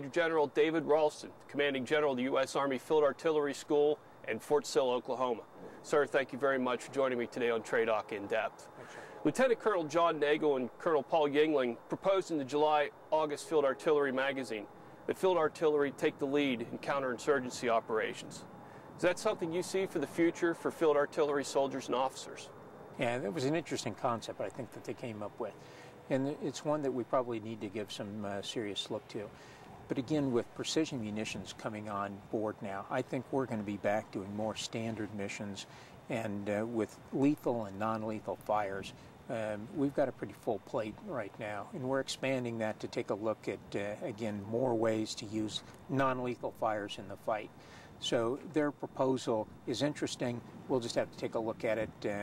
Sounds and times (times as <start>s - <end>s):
Speech: 0.0s - 18.4s, 19.0s - 52.2s.